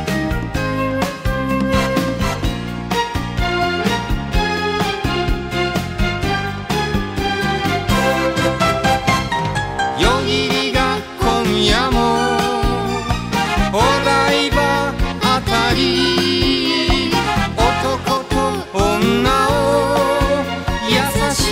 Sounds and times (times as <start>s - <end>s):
Music: 0.0s - 21.5s
Singing: 10.0s - 21.5s.